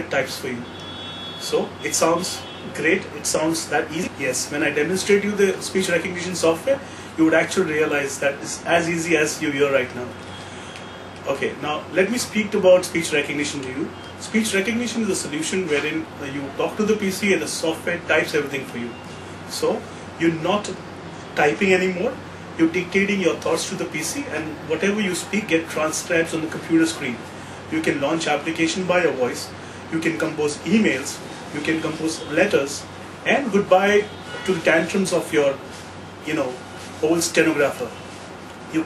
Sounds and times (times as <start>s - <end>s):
Male speech, man speaking: 0.0s - 0.7s, 1.4s - 10.2s, 11.2s - 20.8s, 21.4s - 38.0s
Narration, monologue: 0.0s - 38.8s.